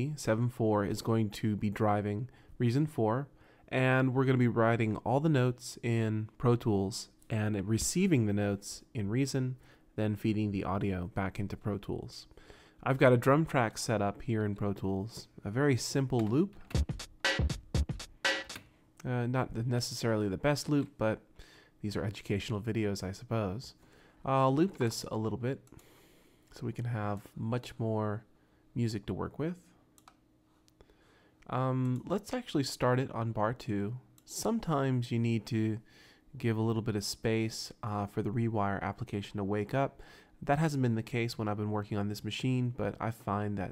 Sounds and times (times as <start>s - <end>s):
Speech: 0.0s - 16.6s, 19.0s - 25.7s, 26.5s - 29.8s, 31.4s - 43.7s.